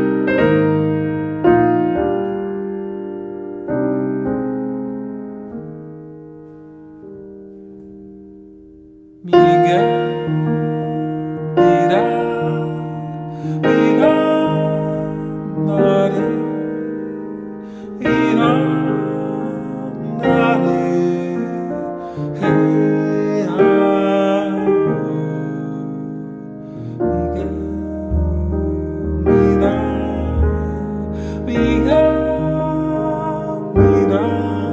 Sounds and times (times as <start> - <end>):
Mantra: 9.3 - 34.7.